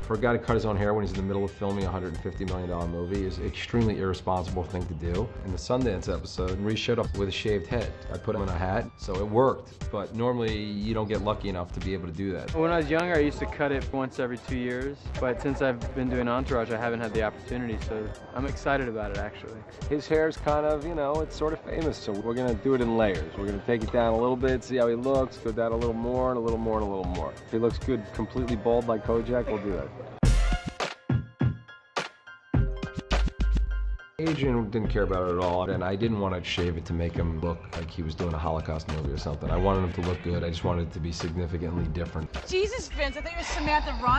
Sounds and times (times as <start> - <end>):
Music: 0.0 - 44.1.